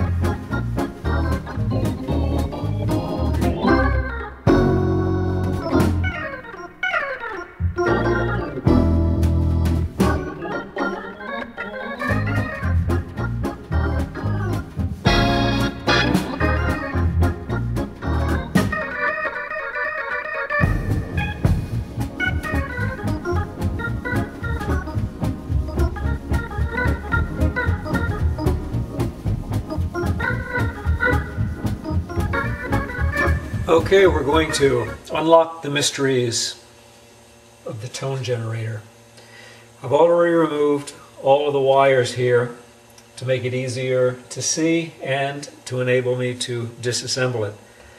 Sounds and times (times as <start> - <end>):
Organ: 0.0 - 36.6.